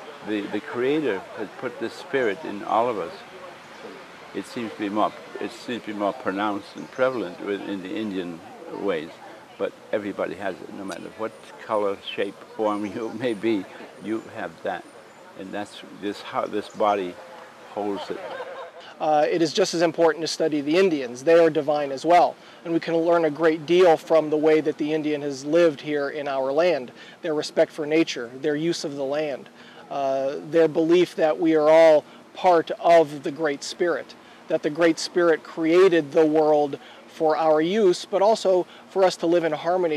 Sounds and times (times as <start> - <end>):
Outside, rural or natural: 0.0 - 39.9
Speech: 0.2 - 3.2, 4.4 - 14.8, 15.4 - 17.2, 17.8 - 18.3, 19.0 - 39.9.